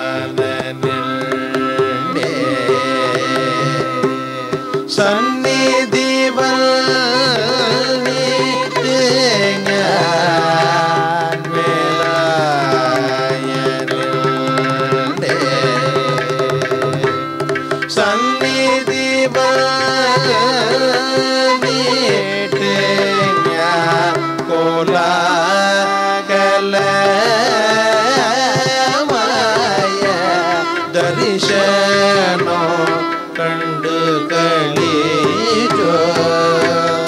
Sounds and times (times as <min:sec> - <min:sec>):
Carnatic music: 0:00.0 - 0:37.0
Plucked string instrument: 0:00.0 - 0:37.0.